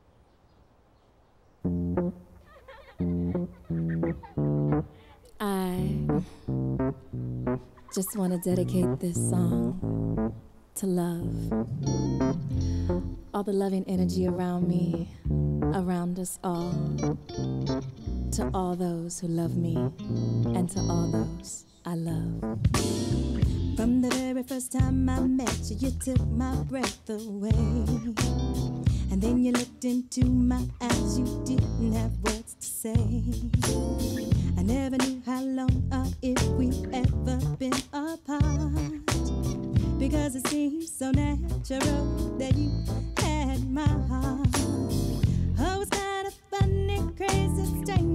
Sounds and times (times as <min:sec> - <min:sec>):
Music: 0:01.7 - 0:02.3, 0:03.0 - 0:05.0, 0:05.7 - 0:07.7, 0:08.5 - 0:10.4, 0:11.3 - 0:16.0, 0:16.6 - 0:21.6, 0:22.2 - 0:48.1.